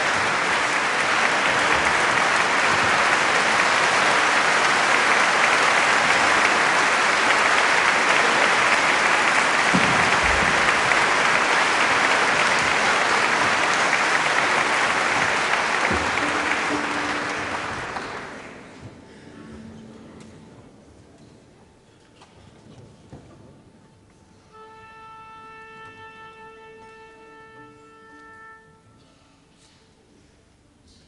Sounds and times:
Orchestra: 0:00.0 - 0:20.5, 0:24.1 - 0:30.6.

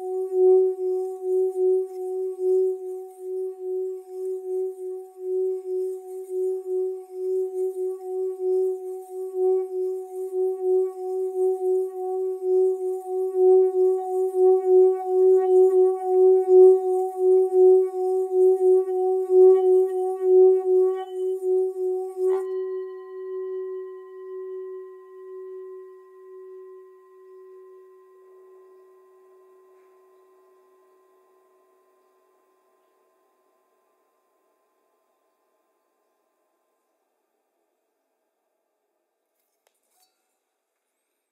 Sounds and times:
Singing bowl: 0:00.0 - 0:36.9.

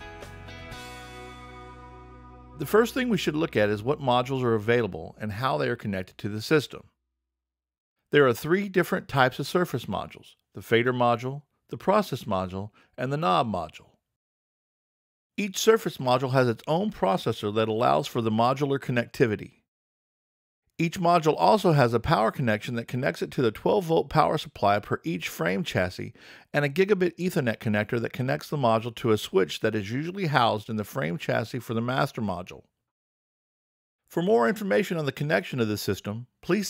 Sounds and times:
Speech: 0:02.6 - 0:06.9, 0:08.1 - 0:14.0, 0:15.4 - 0:19.6, 0:20.8 - 0:32.7, 0:34.1 - 0:36.6.

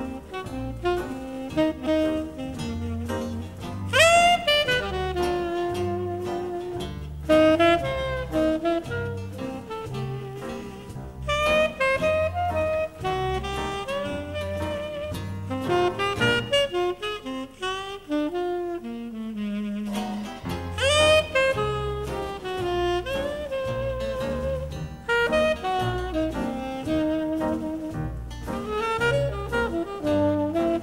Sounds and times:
Music: 0:00.0 - 0:30.8.

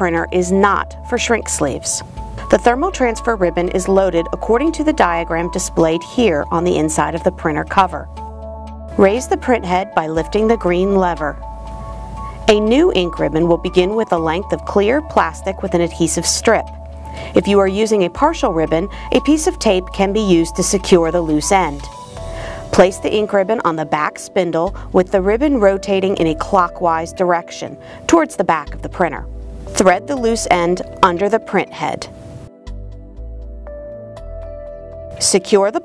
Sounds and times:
Speech: 0:00.0 - 0:08.1, 0:09.0 - 0:11.4, 0:12.5 - 0:16.6, 0:17.4 - 0:21.9, 0:22.8 - 0:32.1, 0:35.2 - 0:35.8
Music: 0:00.0 - 0:35.8.

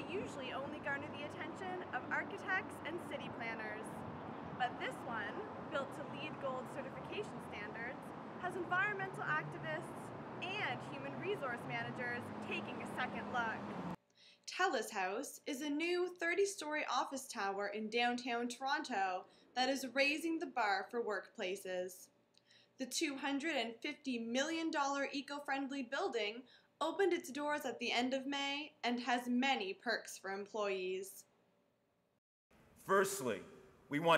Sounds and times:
Speech: 0:00.0 - 0:03.9, 0:04.6 - 0:13.6, 0:14.5 - 0:22.1, 0:22.8 - 0:31.2, 0:32.8 - 0:34.1.

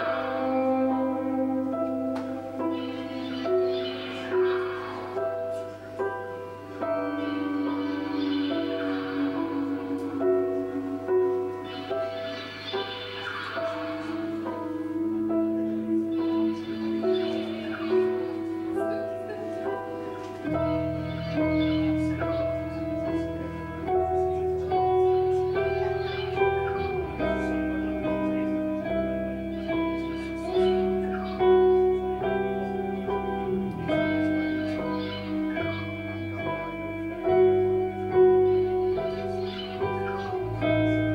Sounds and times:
Music: 0:00.0 - 0:41.1.

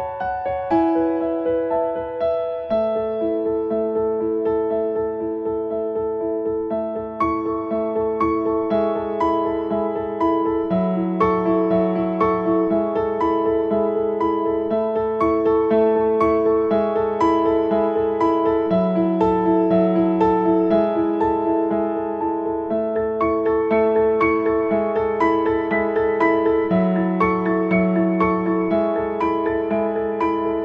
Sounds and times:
Music: 0:00.0 - 0:30.6.

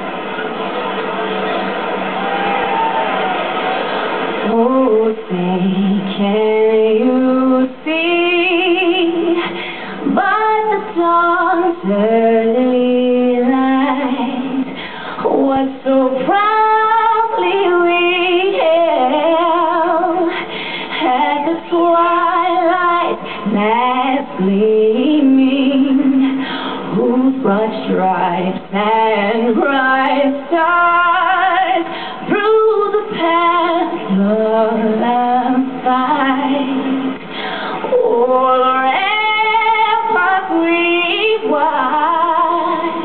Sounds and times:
Female singing: 0:04.4 - 0:37.2, 0:37.9 - 0:43.0.

